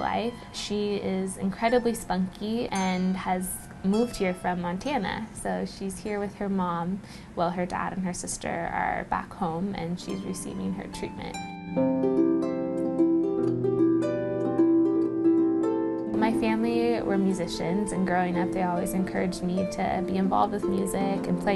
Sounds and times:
Harp: 0.0 - 5.4, 10.0 - 21.5
Speech: 0.0 - 11.4, 16.2 - 21.5.

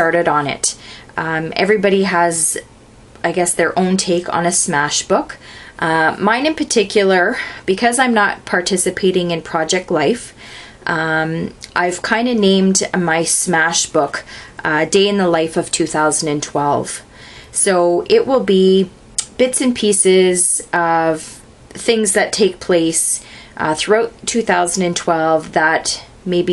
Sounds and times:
Speech: 0.0 - 10.3, 10.9 - 26.5.

